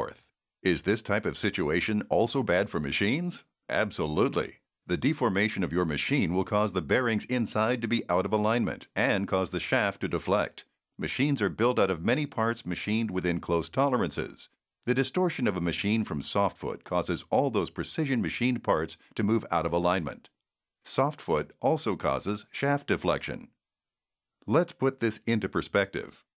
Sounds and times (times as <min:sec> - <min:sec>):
Speech: 0:00.0 - 0:23.6, 0:24.4 - 0:26.3.